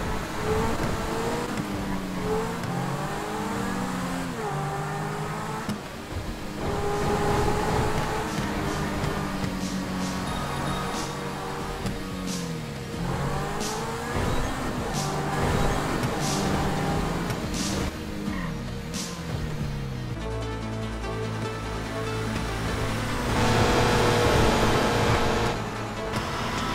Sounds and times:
Car: 0:00.0 - 0:26.7
Music: 0:00.0 - 0:26.7.

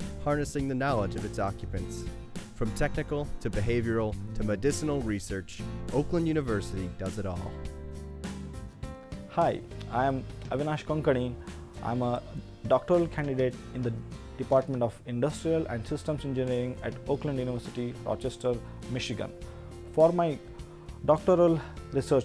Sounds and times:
Music: 0:00.0 - 0:22.2
Speech: 0:00.2 - 0:07.6, 0:09.3 - 0:19.3, 0:19.9 - 0:20.4, 0:21.0 - 0:22.2.

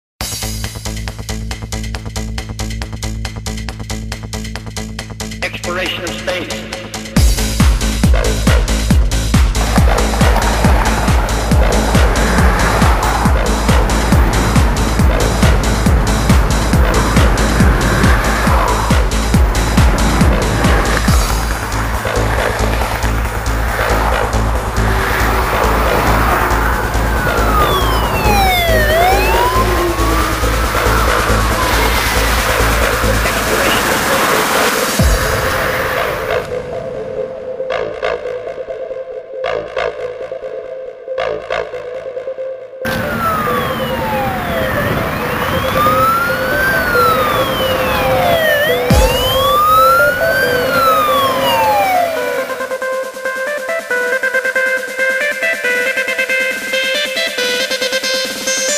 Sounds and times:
Trance music: 0:00.2 - 0:58.7
Speech: 0:05.4 - 0:06.8, 0:33.2 - 0:34.2.

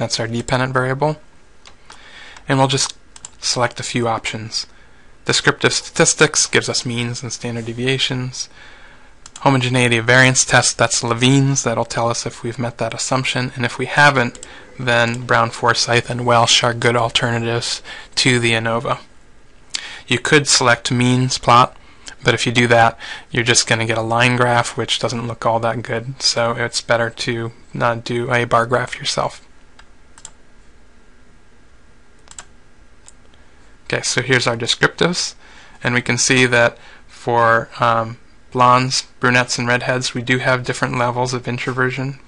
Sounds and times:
Computer keyboard: 0:30.2 - 0:30.4, 0:32.2 - 0:32.5.

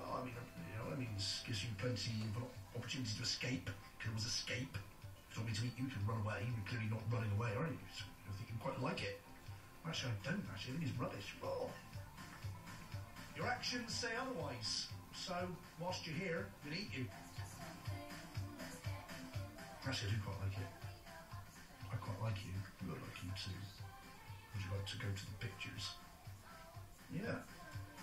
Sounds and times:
Speech: 0:00.0 - 0:09.2, 0:09.8 - 0:11.8, 0:13.4 - 0:17.2, 0:19.8 - 0:20.9, 0:21.8 - 0:23.8, 0:24.5 - 0:26.0, 0:27.1 - 0:27.5
Music: 0:00.0 - 0:28.0.

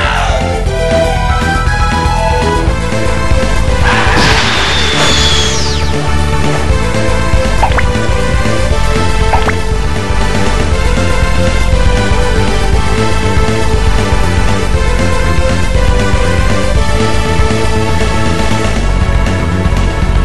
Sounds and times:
Video game music: 0:00.0 - 0:20.2.

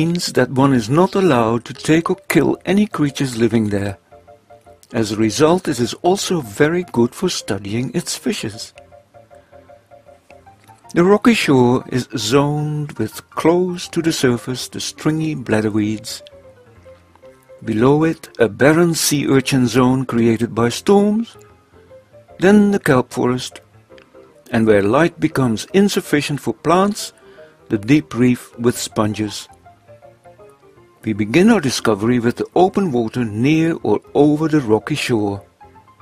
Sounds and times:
Speech: 0:00.0 - 0:04.0, 0:04.9 - 0:08.8, 0:10.9 - 0:16.3, 0:17.6 - 0:21.4, 0:22.4 - 0:23.6, 0:24.5 - 0:27.1, 0:27.7 - 0:29.5, 0:31.0 - 0:35.4
Music: 0:00.0 - 0:36.0.

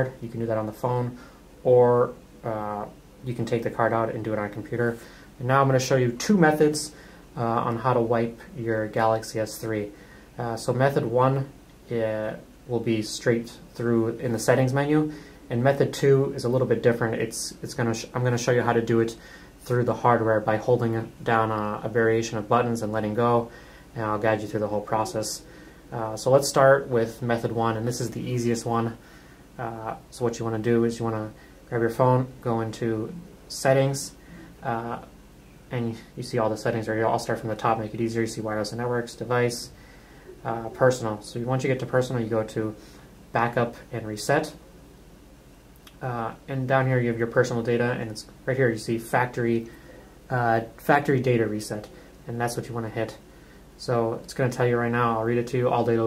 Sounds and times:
Speech: 0:00.0 - 0:29.0, 0:29.6 - 0:39.8, 0:40.4 - 0:44.6, 0:45.9 - 0:56.0.

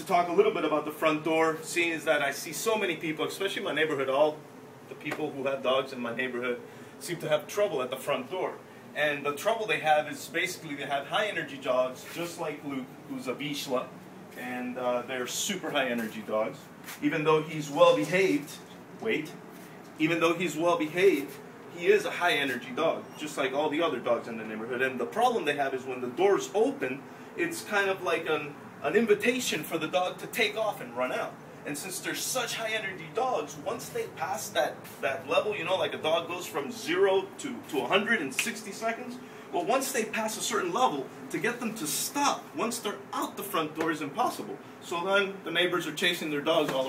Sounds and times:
Speech: 0:00.0 - 0:19.4, 0:20.0 - 0:46.8.

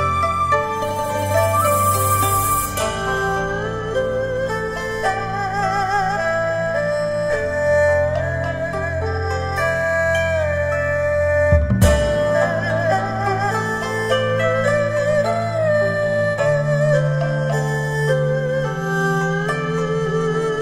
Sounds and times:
Music: 0:00.0 - 0:20.6.

